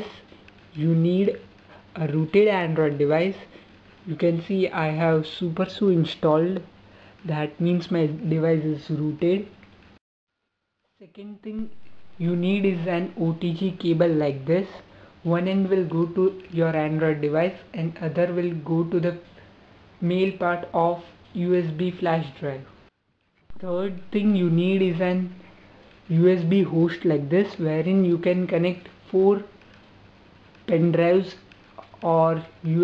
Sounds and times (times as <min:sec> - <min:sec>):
Speech: 0:00.0 - 0:00.2, 0:00.8 - 0:03.5, 0:04.1 - 0:09.6, 0:11.0 - 0:19.2, 0:20.0 - 0:22.8, 0:23.6 - 0:25.4, 0:26.1 - 0:29.6, 0:30.7 - 0:32.8.